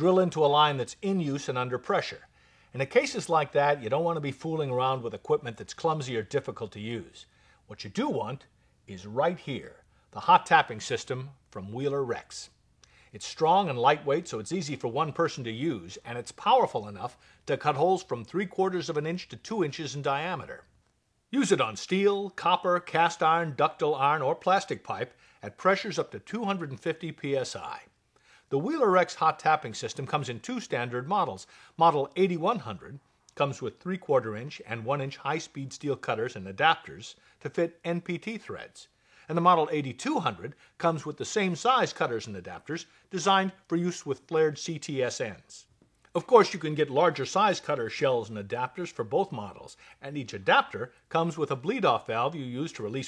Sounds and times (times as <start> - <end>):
Speech: 0.0 - 20.7, 21.3 - 27.9, 28.5 - 53.0.